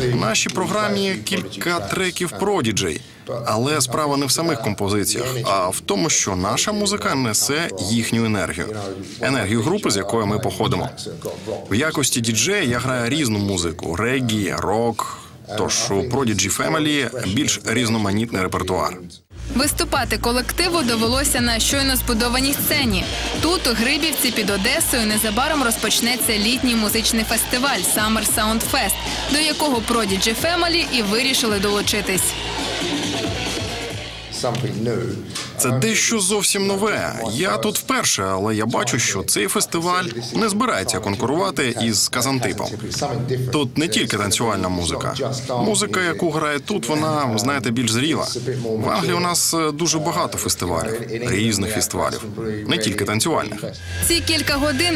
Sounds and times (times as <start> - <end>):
Speech: 0.0 - 32.3, 34.4 - 54.9.